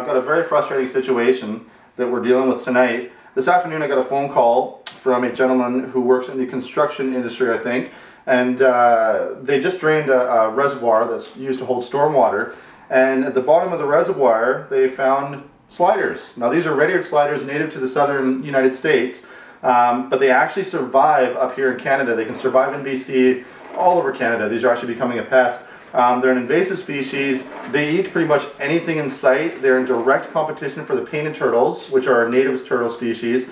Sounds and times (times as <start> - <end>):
Speech: 0.0 - 33.5.